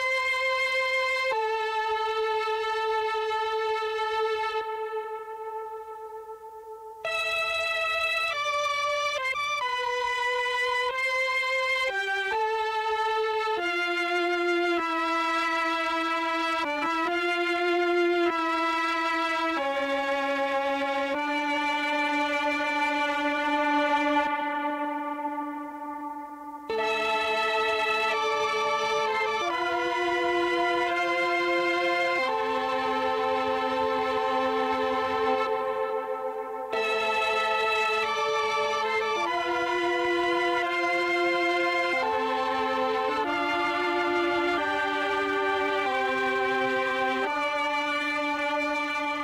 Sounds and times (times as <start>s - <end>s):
Music: 0.0s - 49.2s.